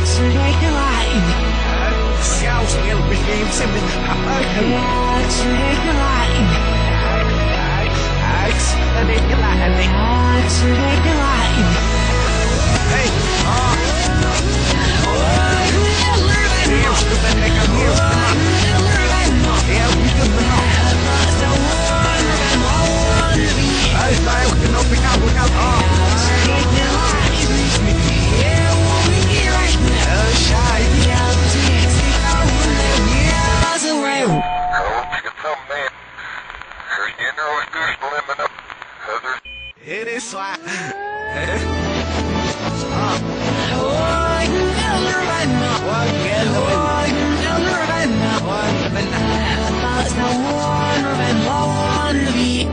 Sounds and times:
Music: 0.0s - 34.6s, 41.2s - 52.7s.

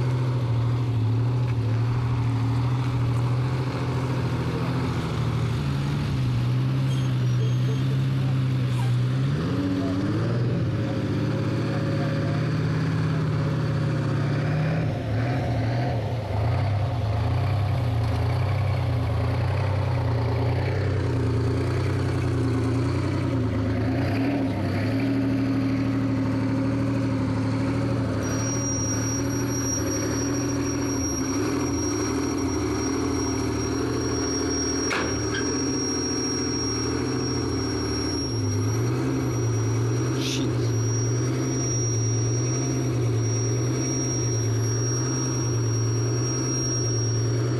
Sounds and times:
Truck: 0.0s - 47.5s.

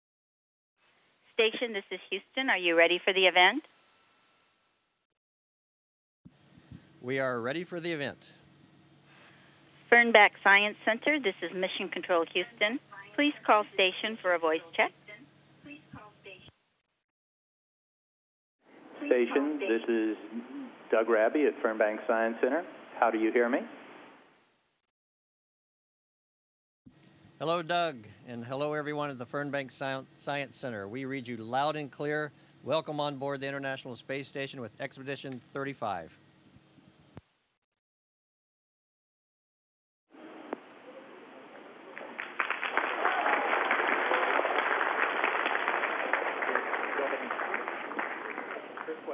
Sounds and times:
Speech: 1.4s - 3.6s, 7.0s - 8.3s, 9.9s - 16.5s, 19.0s - 23.7s, 27.4s - 36.2s, 46.4s - 49.1s.

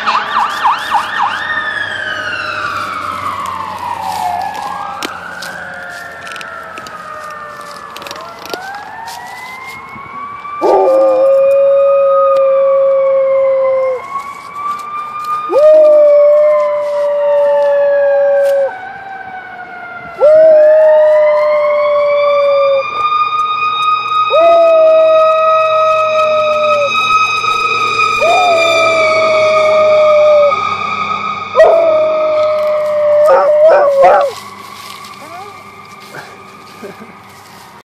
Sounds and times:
Fire engine, fire truck (siren): 0.0s - 37.8s.

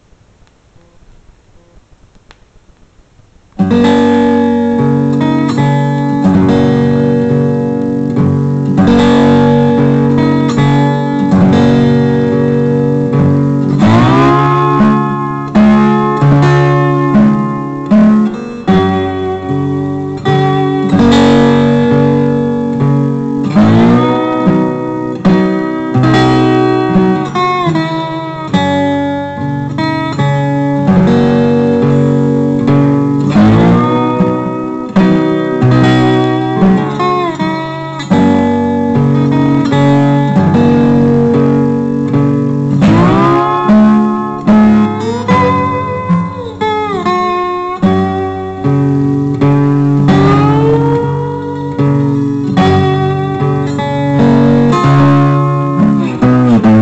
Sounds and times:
Acoustic guitar: 0.0s - 56.8s.

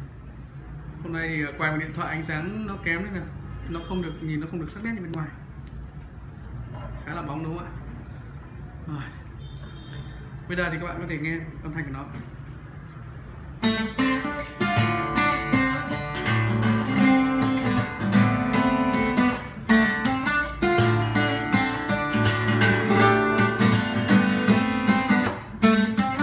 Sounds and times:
Speech: 1.0s - 5.4s, 7.0s - 7.9s, 8.8s - 9.2s, 10.5s - 12.4s.

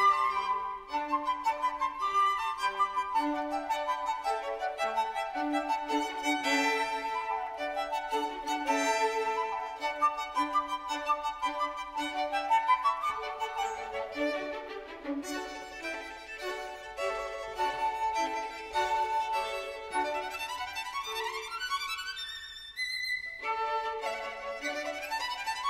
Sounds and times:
Violin, fiddle: 0.0s - 25.6s.

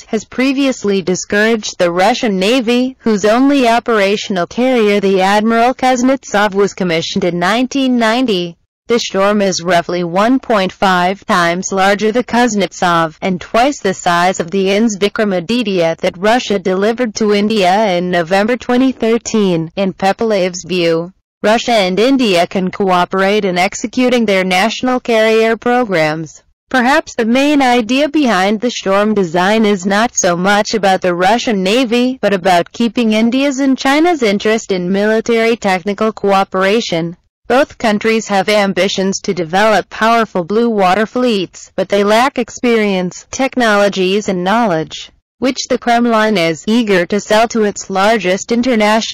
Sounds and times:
Speech: 0.0s - 49.1s.

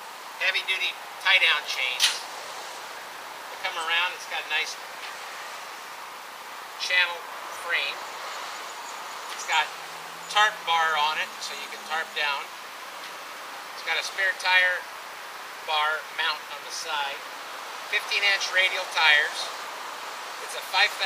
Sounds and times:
Speech: 0.4s - 2.2s, 3.6s - 4.8s, 6.8s - 8.0s, 9.4s - 9.7s, 10.3s - 12.5s, 13.8s - 14.9s, 15.7s - 17.2s, 17.9s - 19.6s, 20.4s - 21.0s.

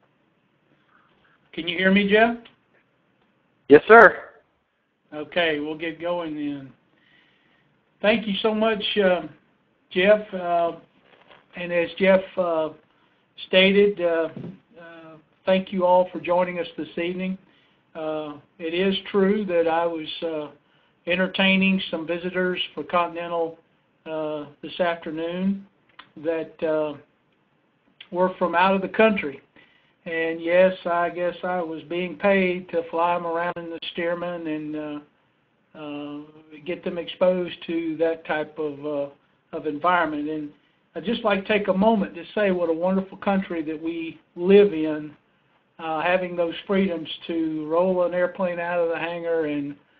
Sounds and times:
Speech: 1.6s - 2.5s, 3.7s - 4.4s, 5.1s - 6.8s, 8.0s - 10.9s, 11.5s - 12.8s, 13.4s - 27.1s, 28.0s - 29.4s, 30.1s - 35.1s, 35.8s - 45.2s, 45.8s - 49.8s.

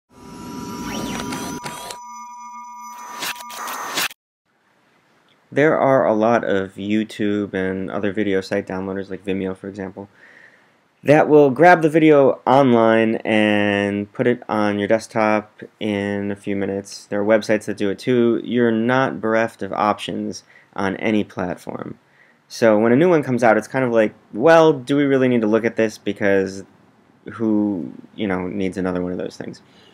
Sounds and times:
Speech: 5.5s - 10.1s, 11.0s - 26.7s, 27.3s - 29.6s.

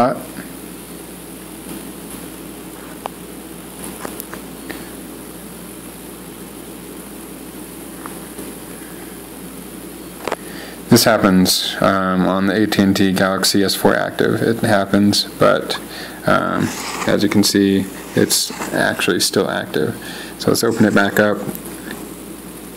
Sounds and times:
Speech: 0.0s - 0.4s, 10.9s - 21.6s
Inside, small room: 0.0s - 22.7s.

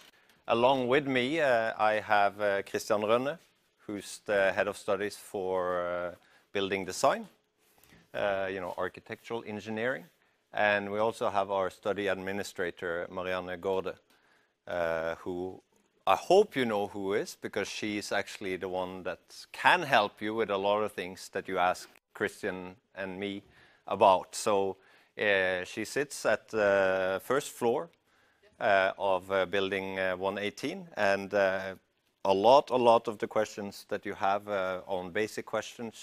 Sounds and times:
Speech: 0.5s - 7.4s, 8.1s - 14.0s, 14.7s - 36.0s.

